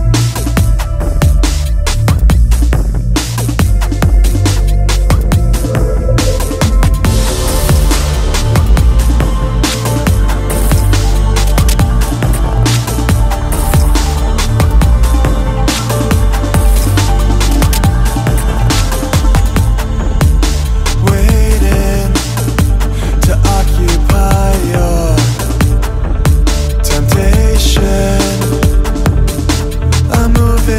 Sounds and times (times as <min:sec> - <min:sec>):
Drum and bass: 0:00.0 - 0:30.7.